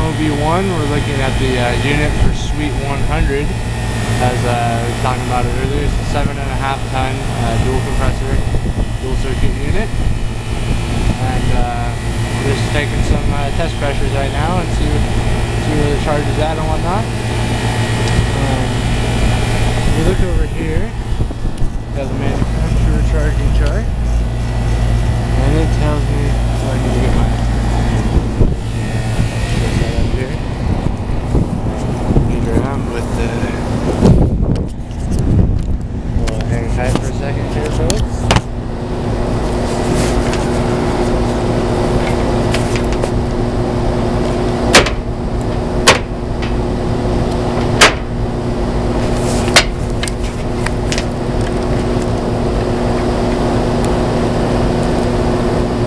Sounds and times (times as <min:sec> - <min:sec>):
Speech: 0:00.0 - 0:03.6, 0:04.2 - 0:09.9, 0:11.2 - 0:17.1, 0:18.3 - 0:18.8, 0:19.9 - 0:21.0, 0:21.9 - 0:24.2, 0:25.4 - 0:28.1, 0:29.6 - 0:30.4, 0:32.3 - 0:33.6, 0:36.2 - 0:38.3.